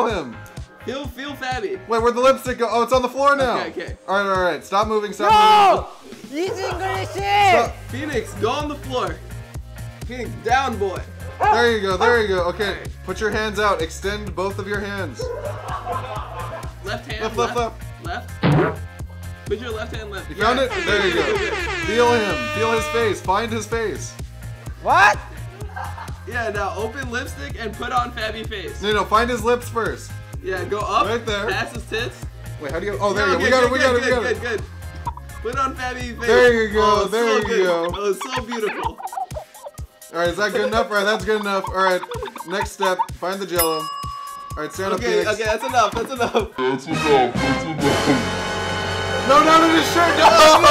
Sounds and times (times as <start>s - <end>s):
Music: 0.0s - 50.7s.